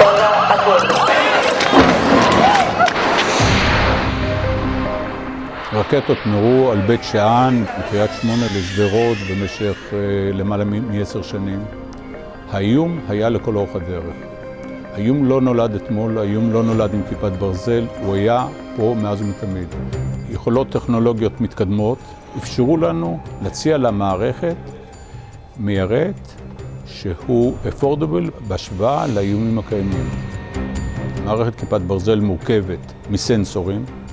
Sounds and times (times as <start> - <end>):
Speech: 0.0 - 1.6, 5.7 - 11.7, 12.5 - 14.2, 15.0 - 19.7, 20.3 - 24.6, 25.6 - 26.3, 26.9 - 30.1, 31.2 - 33.9
Music: 0.0 - 34.1.